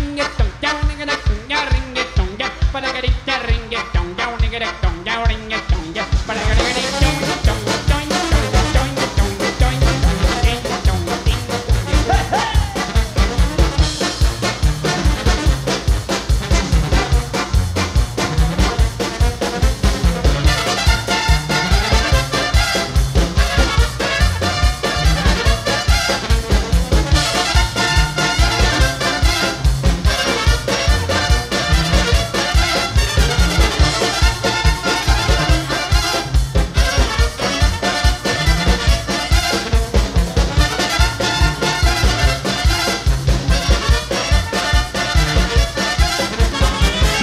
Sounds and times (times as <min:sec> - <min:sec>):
Funny music: 0:00.0 - 0:47.2.